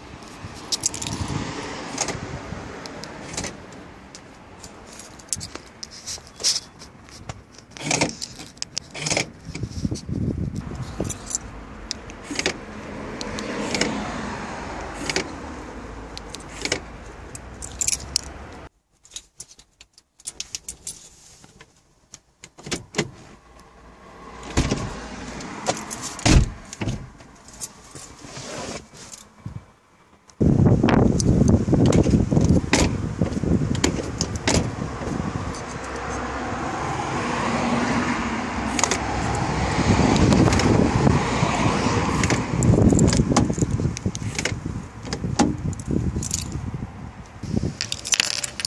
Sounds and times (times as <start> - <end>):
Car: 0.0 - 48.6.